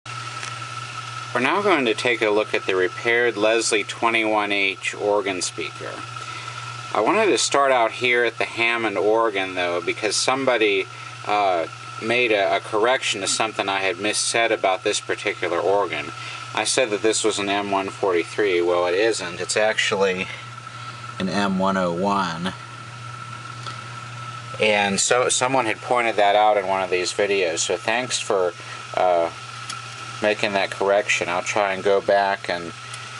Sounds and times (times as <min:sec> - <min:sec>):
Speech: 0:01.4 - 0:06.0, 0:06.9 - 0:20.4, 0:24.6 - 0:29.4, 0:30.2 - 0:32.7.